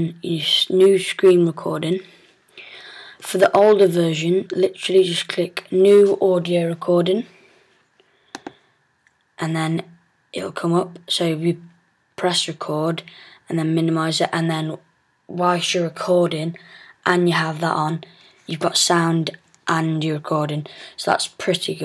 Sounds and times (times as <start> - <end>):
Speech: 0.0 - 2.1, 3.2 - 7.4, 9.4 - 21.8
Inside, small room: 0.0 - 21.8.